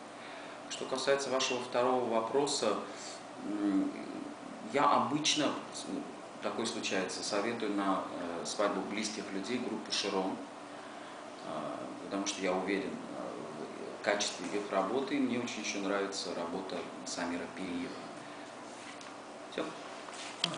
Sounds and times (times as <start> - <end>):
Speech: 0.7 - 10.5, 11.4 - 18.1, 19.5 - 19.8.